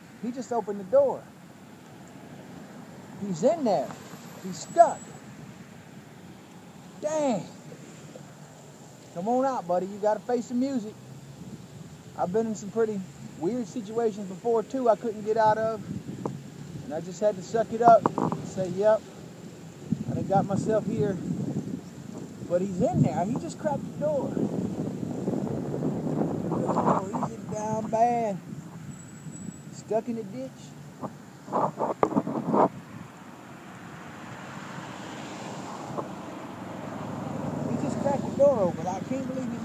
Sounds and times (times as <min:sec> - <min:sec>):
Car: 0:00.0 - 0:39.6
Rustling leaves: 0:00.0 - 0:39.6
Speech: 0:00.2 - 0:01.2, 0:03.2 - 0:05.1, 0:07.0 - 0:07.6, 0:09.2 - 0:11.0, 0:12.2 - 0:15.8, 0:16.9 - 0:19.0, 0:20.1 - 0:21.2, 0:22.5 - 0:24.4, 0:26.8 - 0:28.4, 0:29.8 - 0:30.8, 0:37.7 - 0:39.6.